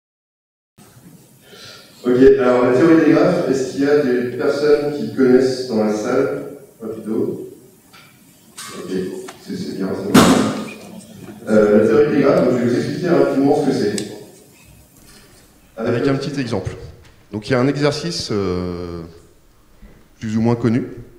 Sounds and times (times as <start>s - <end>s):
Speech: 2.0s - 7.6s, 8.6s - 14.3s, 15.8s - 19.2s, 20.2s - 21.1s.